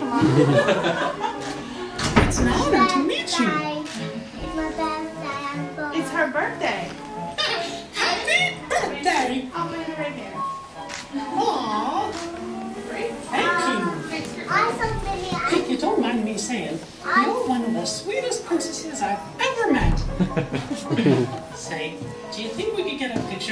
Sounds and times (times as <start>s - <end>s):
Music: 0.0s - 23.5s.